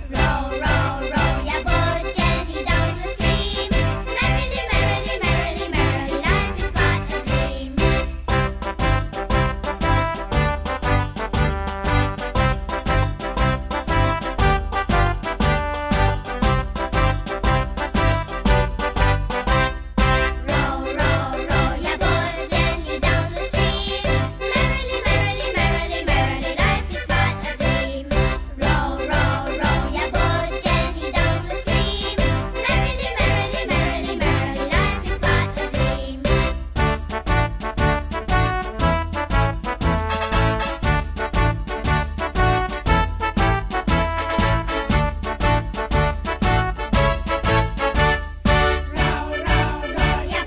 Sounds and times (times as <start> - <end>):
Music: 0.0 - 50.4.